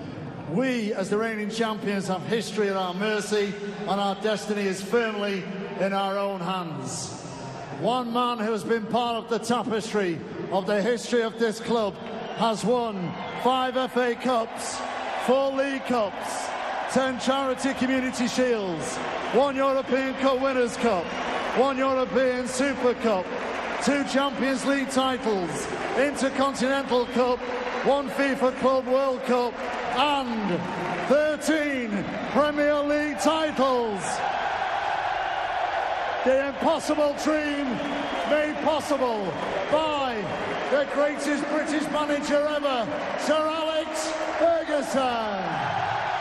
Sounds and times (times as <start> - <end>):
Narration, monologue: 0.0 - 34.2, 36.2 - 45.6
Male speech, man speaking: 0.5 - 7.2, 7.8 - 34.2, 36.2 - 45.7.